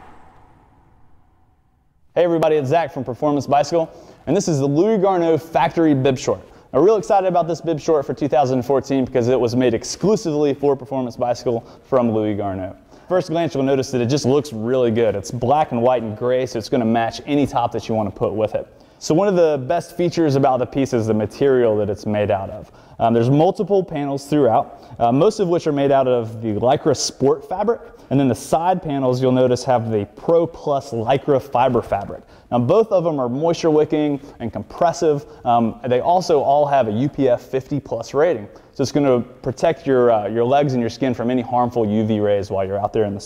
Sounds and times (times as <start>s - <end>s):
Speech: 2.2s - 43.2s.